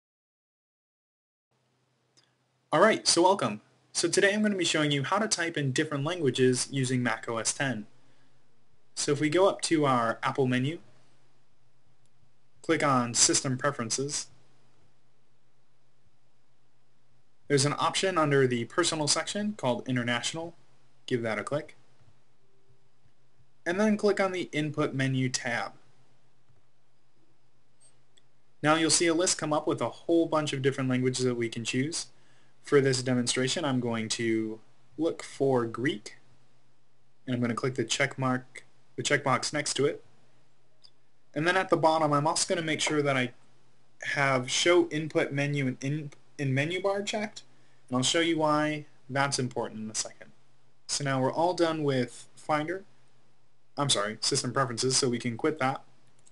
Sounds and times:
Speech: 0:02.7 - 0:07.9, 0:09.0 - 0:10.9, 0:12.6 - 0:14.4, 0:17.5 - 0:21.8, 0:23.6 - 0:25.8, 0:28.6 - 0:36.2, 0:37.2 - 0:40.1, 0:41.3 - 0:43.4, 0:44.0 - 0:52.9, 0:53.8 - 0:55.9.

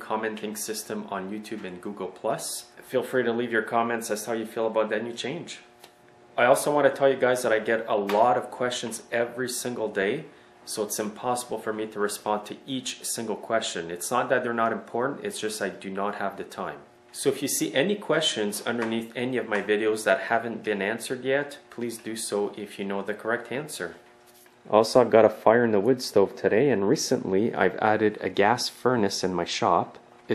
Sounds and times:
Speech: 0:00.0 - 0:05.7, 0:06.4 - 0:24.0, 0:24.7 - 0:30.3.

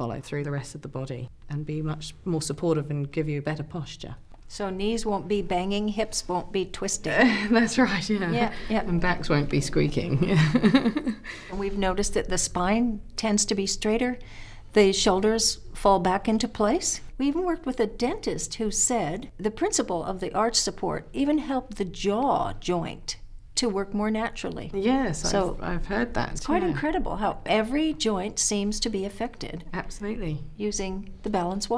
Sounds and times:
Speech: 0:14.8 - 0:31.7.

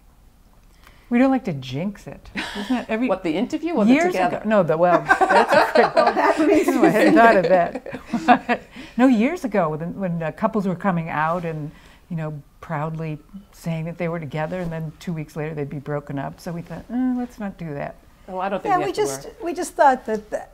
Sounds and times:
Speech: 0:09.0 - 0:20.5.

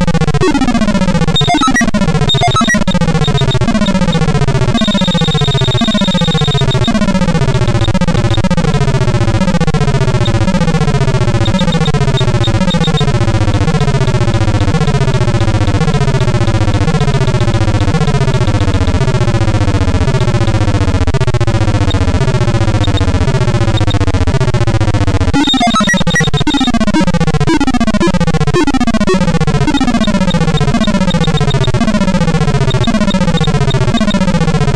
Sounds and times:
Music: 0:00.0 - 0:34.7.

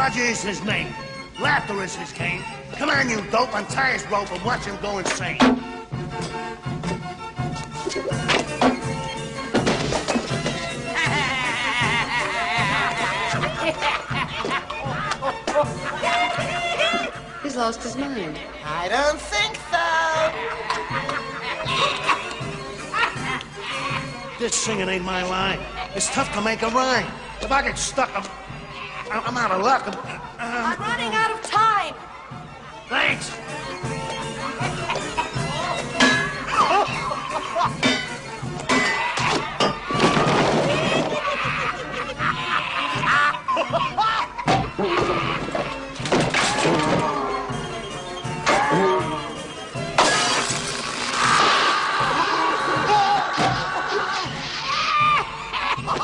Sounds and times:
Music: 0:00.0 - 0:56.0.

